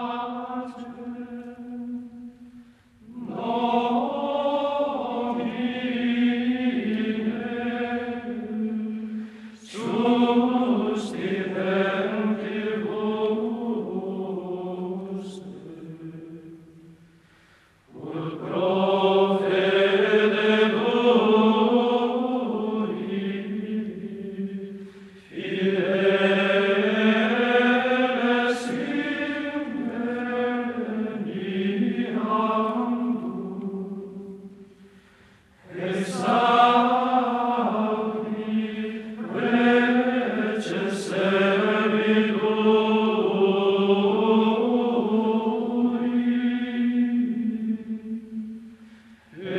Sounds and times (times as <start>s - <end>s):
Mantra: 0.0s - 17.0s, 17.9s - 34.7s, 35.6s - 49.5s.